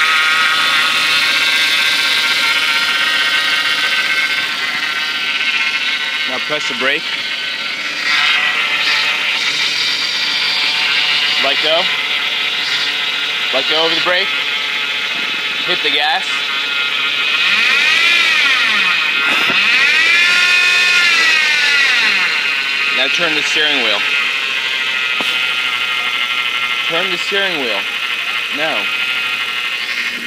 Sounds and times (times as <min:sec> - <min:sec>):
Heavy engine (low frequency): 0:00.0 - 0:30.2
Speech: 0:06.3 - 0:07.0, 0:11.4 - 0:11.9, 0:13.5 - 0:14.3, 0:15.6 - 0:16.4, 0:23.0 - 0:24.0, 0:26.9 - 0:27.9, 0:28.5 - 0:28.9.